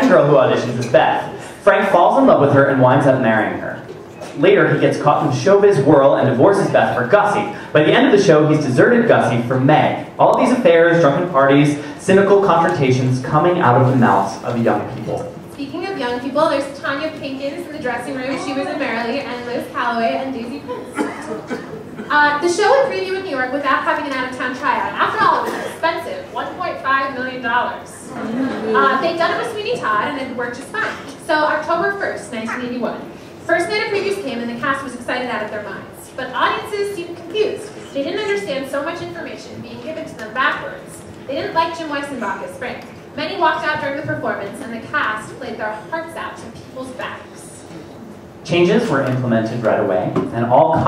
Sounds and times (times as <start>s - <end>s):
Speech: 4.4s - 21.5s.